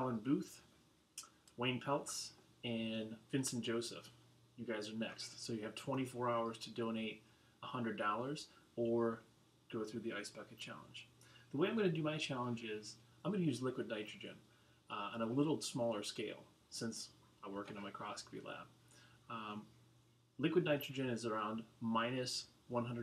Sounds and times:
Speech: 0.0s - 19.7s, 20.4s - 23.0s.

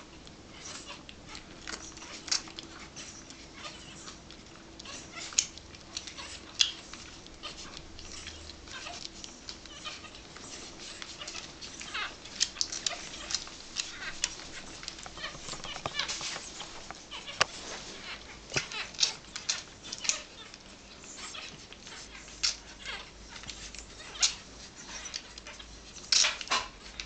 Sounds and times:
Dog: 0.5s - 27.0s.

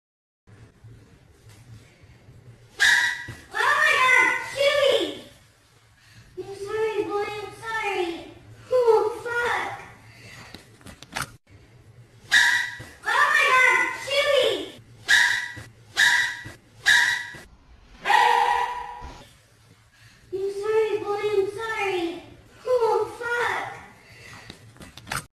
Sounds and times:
Yip: 2.8s - 3.4s, 12.3s - 12.9s, 15.1s - 19.2s
Speech: 3.5s - 5.3s, 6.4s - 9.9s, 13.0s - 14.8s, 20.3s - 24.0s.

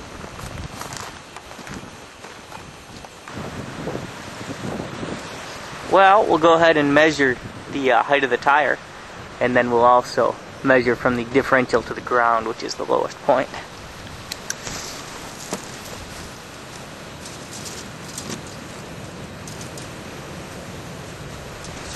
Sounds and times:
Speech: 5.9s - 8.8s, 9.4s - 13.7s.

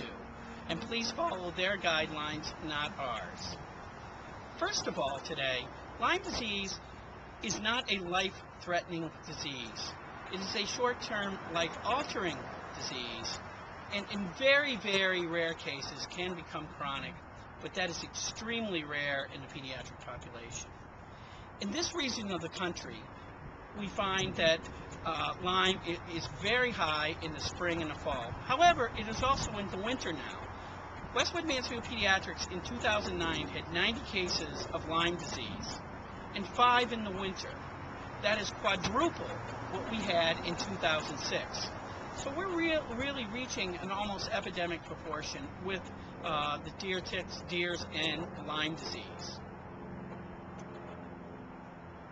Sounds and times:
Speech: 0.0s - 3.6s, 4.6s - 6.8s, 7.4s - 20.7s, 21.6s - 23.1s, 23.7s - 30.5s, 31.1s - 37.6s, 38.2s - 49.4s.

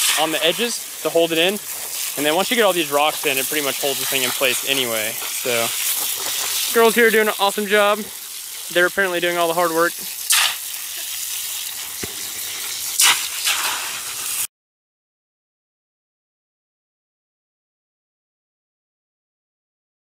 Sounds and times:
Speech: 0.1s - 1.6s, 2.2s - 5.7s, 6.7s - 8.1s, 8.7s - 10.1s.

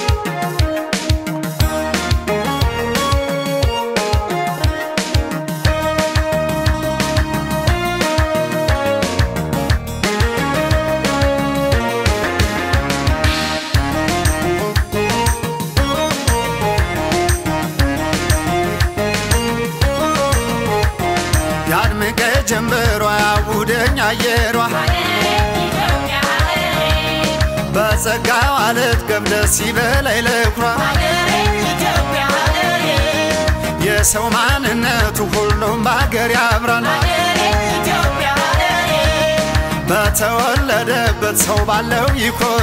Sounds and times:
Music: 0.0s - 42.6s.

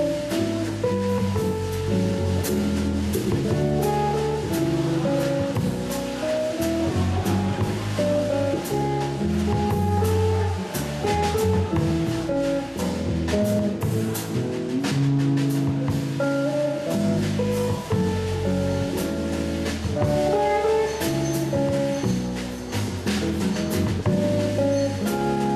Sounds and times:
Strum: 0.0s - 25.5s.

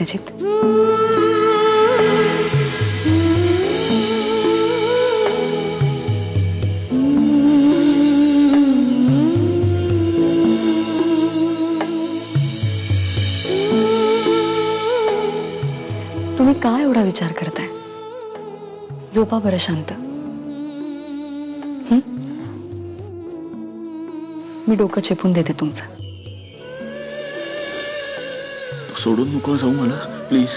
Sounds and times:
Music of Bollywood: 0.0s - 30.5s.

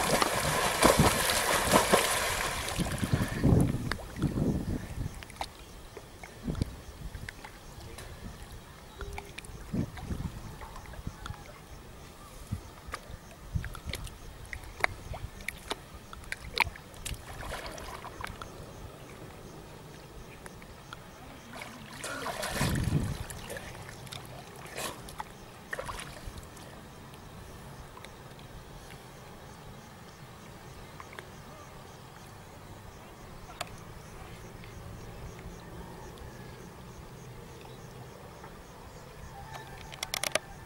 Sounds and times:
Outside, rural or natural: 0.0s - 40.6s.

